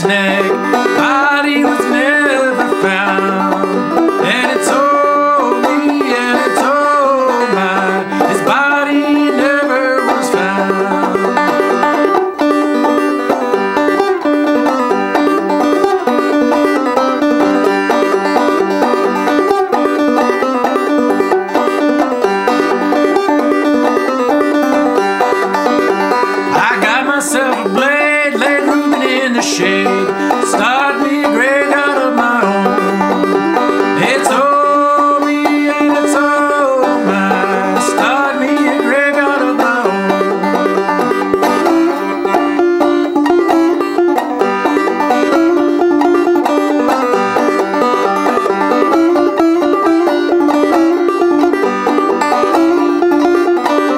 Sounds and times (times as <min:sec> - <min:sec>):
Banjo: 0:00.0 - 0:53.9
Bluegrass: 0:00.0 - 0:53.9
Guitar: 0:00.0 - 0:53.9
Ukulele: 0:00.0 - 0:53.9.